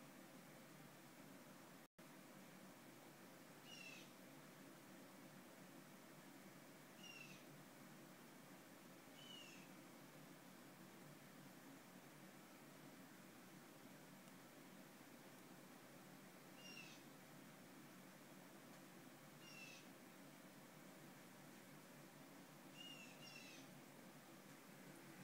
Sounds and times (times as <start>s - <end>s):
Owl: 3.6s - 4.2s, 7.0s - 7.5s, 9.2s - 9.7s, 16.6s - 17.1s, 19.4s - 19.9s, 22.7s - 23.7s.